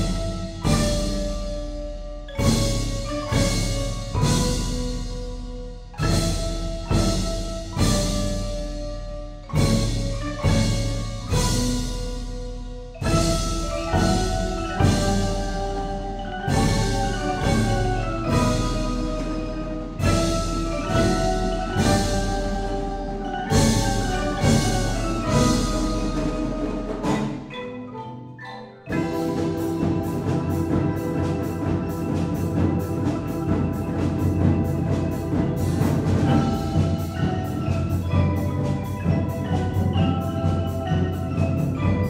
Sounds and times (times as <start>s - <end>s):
Percussion: 0.0s - 42.0s.